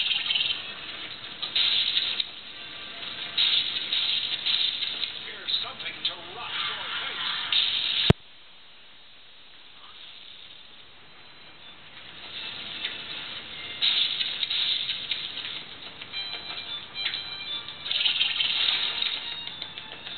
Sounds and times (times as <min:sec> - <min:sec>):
Speech: 0:05.2 - 0:07.4.